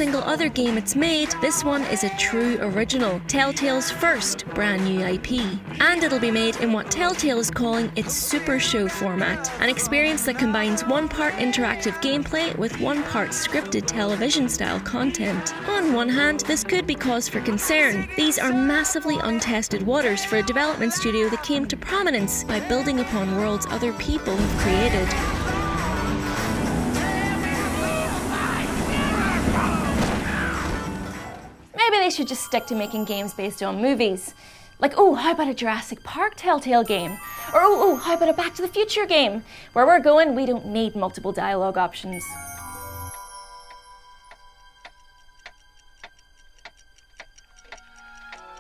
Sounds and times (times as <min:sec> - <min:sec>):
Speech: 0:00.0 - 0:25.3, 0:31.8 - 0:42.2
Music: 0:00.0 - 0:48.6.